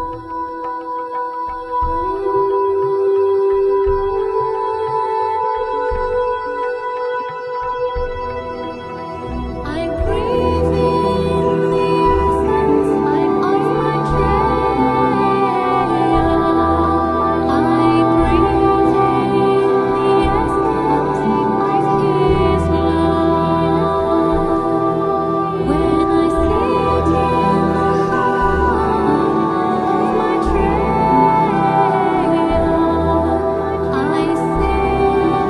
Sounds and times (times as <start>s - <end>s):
Mantra: 0.0s - 35.4s.